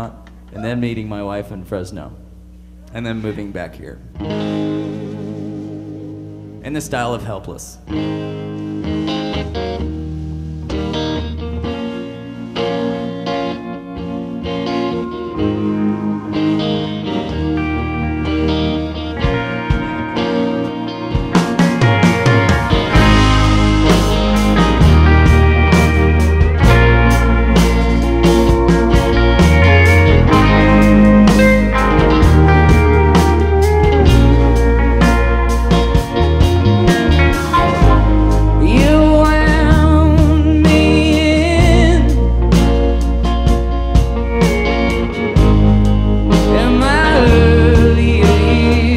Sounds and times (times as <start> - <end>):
Speech: 0.0 - 2.2, 2.9 - 4.1, 6.6 - 7.9
Guitar: 0.0 - 48.9.